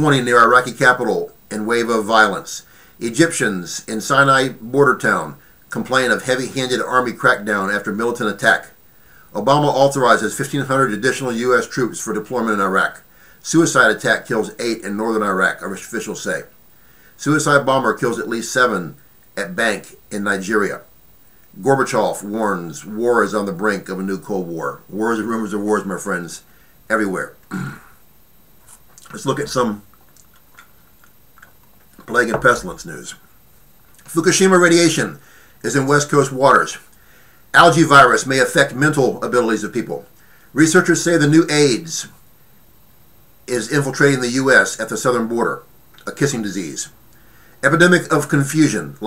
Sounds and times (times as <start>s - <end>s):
Male speech, man speaking: 0.0s - 8.8s, 9.4s - 16.5s, 17.2s - 20.9s, 21.6s - 27.4s, 29.0s - 29.9s, 32.0s - 33.2s, 34.1s - 36.9s, 37.6s - 42.2s, 43.5s - 47.0s, 47.6s - 49.0s.